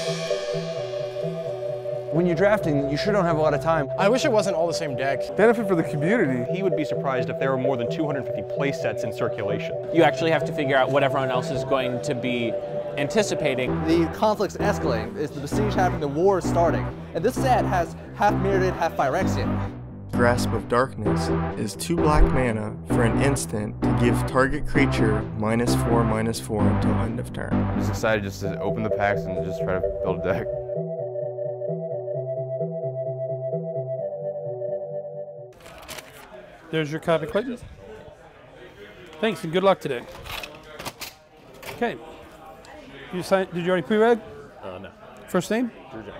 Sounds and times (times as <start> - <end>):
Music: 0.0 - 35.6
Speech: 2.2 - 19.5, 20.2 - 30.5.